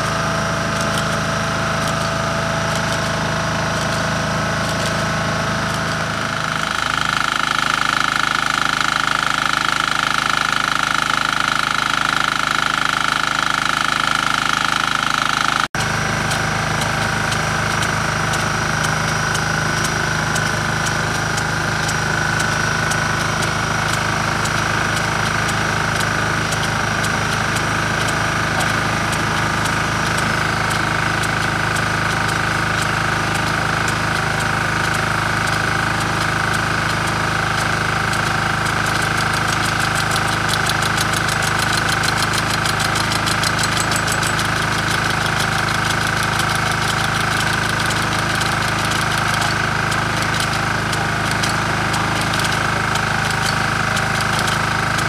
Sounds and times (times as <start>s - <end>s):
Idling: 0.0s - 55.0s
Medium engine (mid frequency): 0.0s - 55.0s.